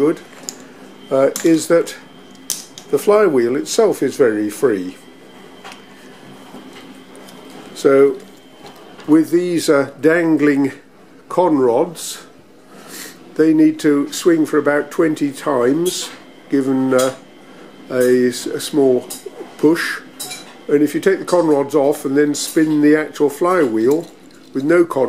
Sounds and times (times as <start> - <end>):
Speech: 0.0 - 0.2, 1.1 - 2.1, 2.9 - 5.0, 7.8 - 8.3, 9.1 - 12.4, 13.4 - 17.2, 17.9 - 20.1, 20.7 - 25.0.